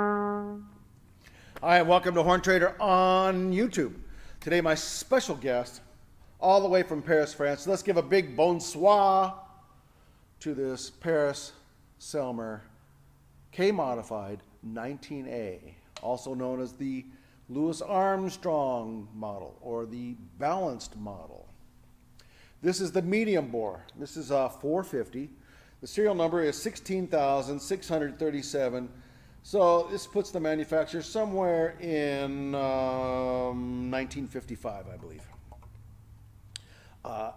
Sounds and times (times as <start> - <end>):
Speech: 1.6 - 9.4, 10.4 - 12.7, 13.5 - 21.6, 22.6 - 35.3, 37.1 - 37.3.